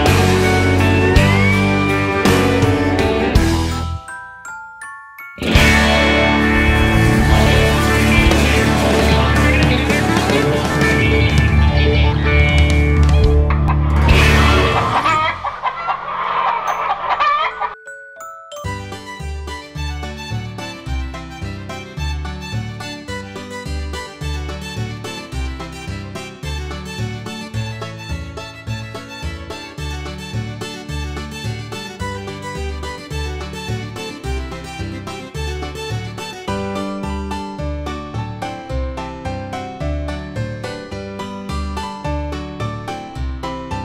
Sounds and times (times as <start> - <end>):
Glockenspiel: 3.2 - 6.7, 16.6 - 21.9
Marimba, xylophone: 3.2 - 8.9, 16.6 - 20.3
Chime: 3.6 - 6.3, 16.6 - 19.6.